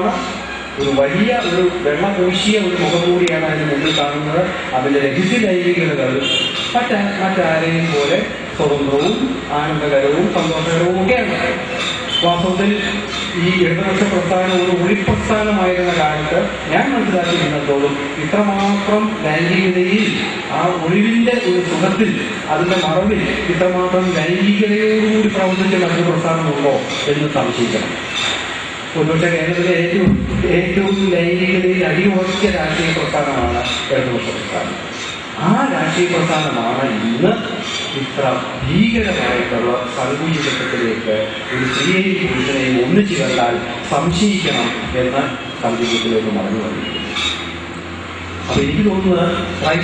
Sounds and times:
Male speech, man speaking: 0.0s - 28.0s, 29.0s - 34.8s, 35.4s - 47.0s, 48.5s - 49.8s
Narration, monologue: 0.0s - 49.8s.

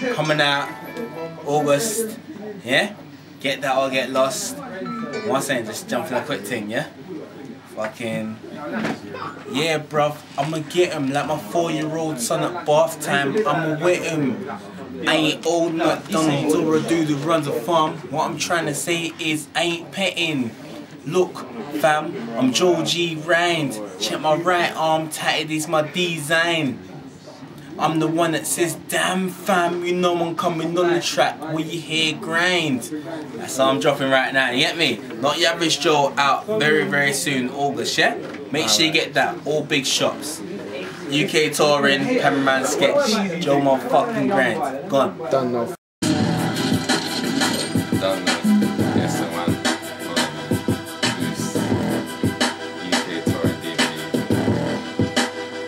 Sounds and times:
Speech: 0.0s - 45.8s.

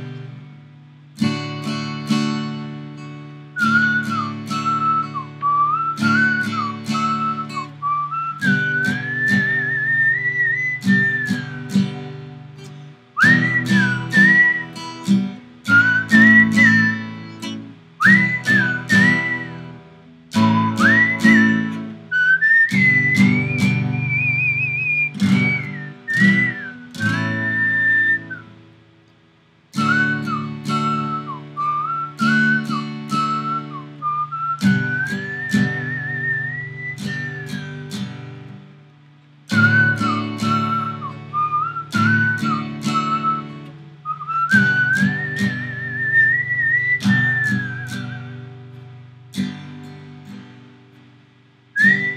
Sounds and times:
Acoustic guitar: 0.0s - 52.1s
Strum: 0.0s - 52.1s
Whistling: 3.6s - 28.6s, 29.8s - 38.6s, 39.5s - 50.4s, 51.8s - 52.1s.

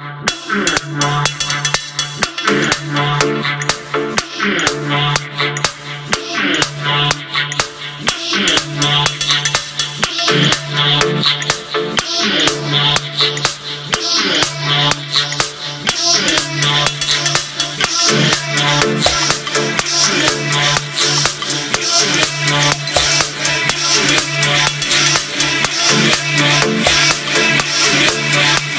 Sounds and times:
House music: 0.0s - 28.7s.

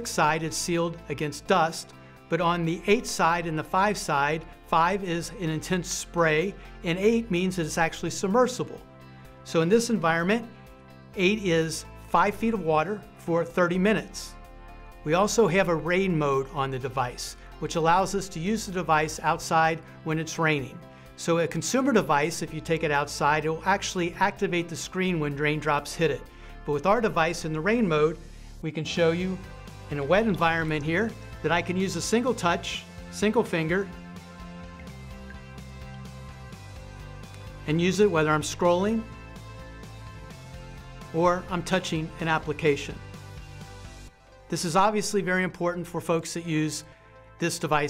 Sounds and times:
Speech: 0.0s - 8.8s, 9.5s - 10.5s, 11.2s - 14.4s, 15.1s - 33.9s, 37.6s - 39.1s, 41.1s - 43.0s, 44.5s - 47.9s
Music: 0.0s - 47.9s.

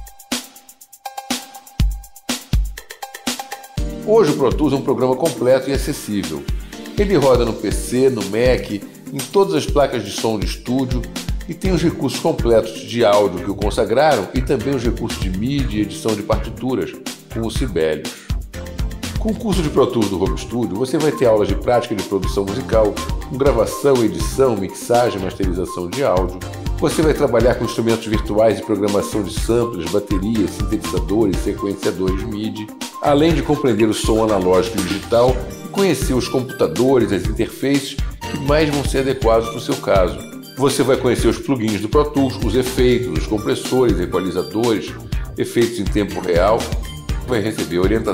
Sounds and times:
Music: 0.0s - 48.1s
Speech: 4.0s - 18.2s, 19.2s - 48.1s.

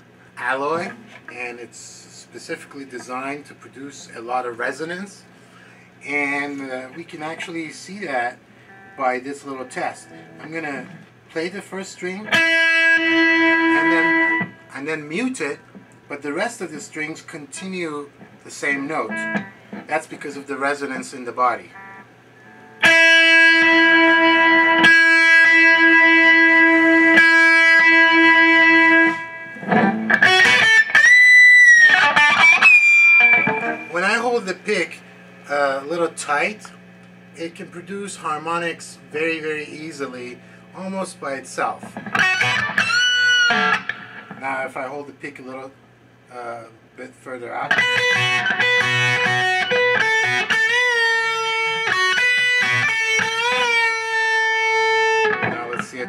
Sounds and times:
Speech: 0.4s - 5.3s, 6.0s - 8.4s, 9.0s - 12.3s, 13.7s - 19.3s, 19.9s - 21.7s, 33.9s - 36.8s, 37.4s - 41.9s, 44.4s - 47.8s, 55.5s - 56.0s.

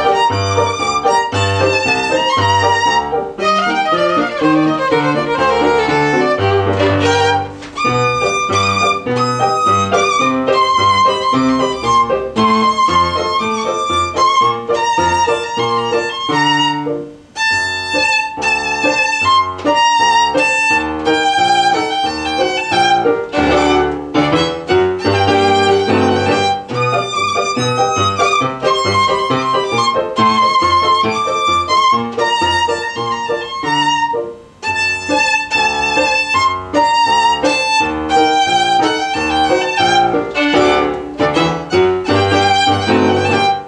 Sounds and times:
Violin, fiddle: 0.0s - 43.6s.

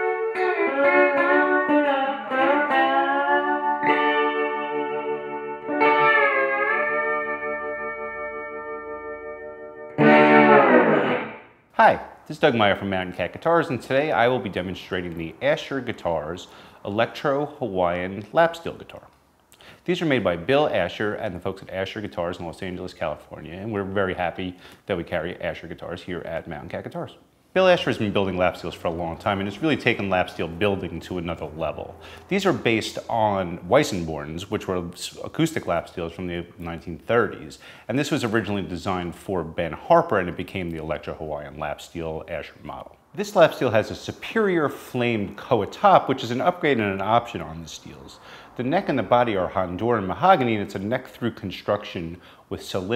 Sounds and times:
Music: 0.0s - 11.6s
Speech: 11.8s - 19.1s, 19.8s - 52.9s.

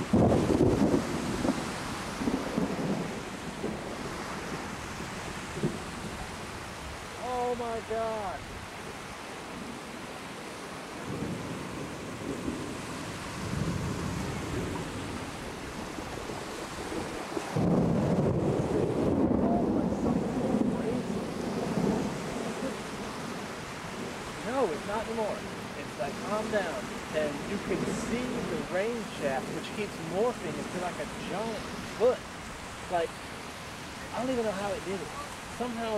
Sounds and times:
Thunder: 0.0s - 6.4s, 11.0s - 24.2s
Rain on surface: 0.0s - 35.9s.

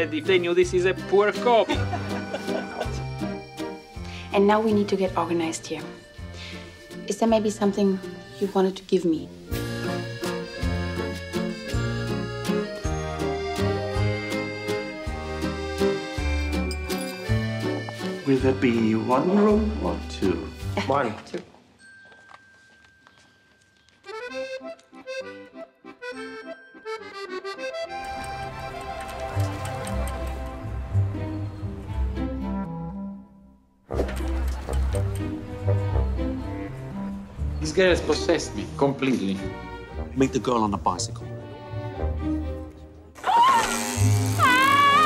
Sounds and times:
Music: 0.0s - 45.0s.

